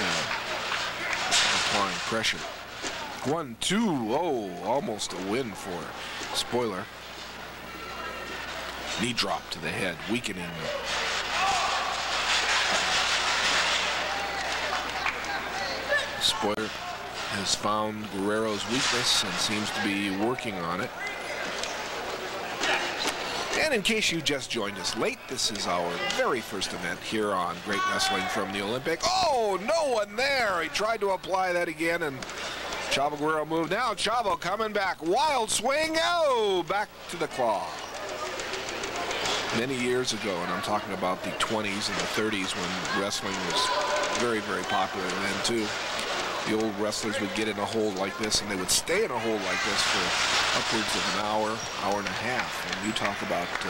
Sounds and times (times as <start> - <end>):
Speech: 1.2 - 2.6, 3.2 - 6.9, 8.9 - 10.8, 14.1 - 21.0, 23.5 - 32.2, 32.9 - 37.8, 39.5 - 45.8, 46.4 - 53.7.